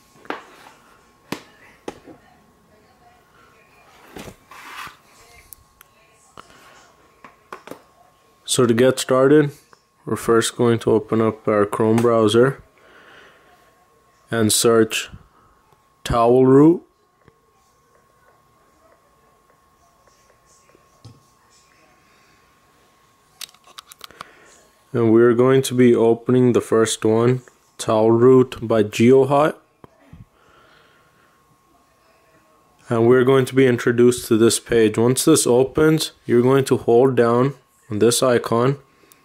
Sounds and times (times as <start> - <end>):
Speech: 5.1 - 12.7, 13.4 - 22.3, 24.4 - 30.3, 31.8 - 38.8.